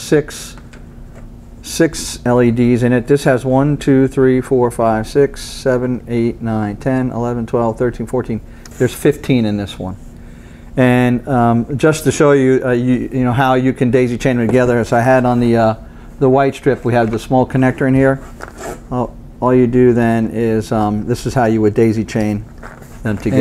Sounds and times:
Speech: 0:00.0 - 0:00.6, 0:01.6 - 0:10.0, 0:10.8 - 0:18.2, 0:18.9 - 0:23.4.

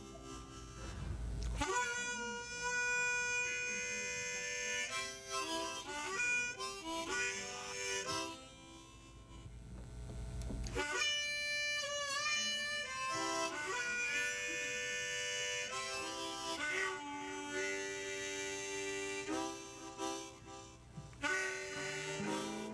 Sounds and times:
Music: 0:00.0 - 0:09.6, 0:10.6 - 0:22.7.

